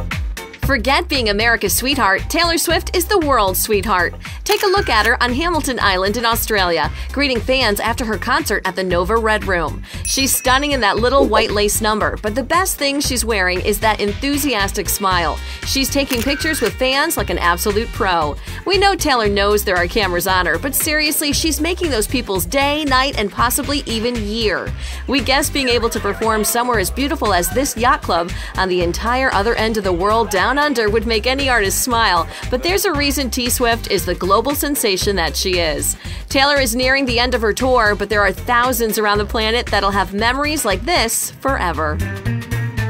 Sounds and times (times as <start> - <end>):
Music: 0.0 - 42.8
Speech: 0.6 - 42.0.